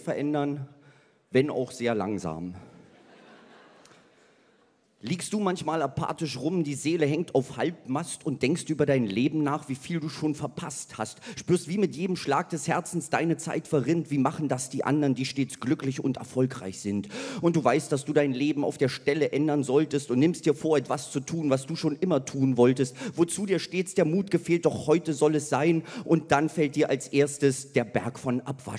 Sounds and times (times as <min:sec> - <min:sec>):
Speech: 0:00.0 - 0:00.7, 0:01.3 - 0:02.7, 0:05.0 - 0:28.7.